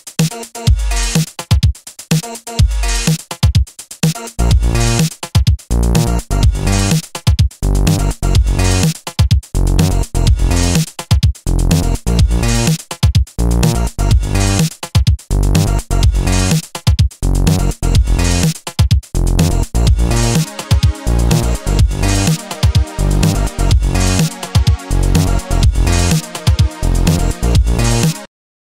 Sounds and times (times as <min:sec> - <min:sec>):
Music: 0:00.0 - 0:28.3.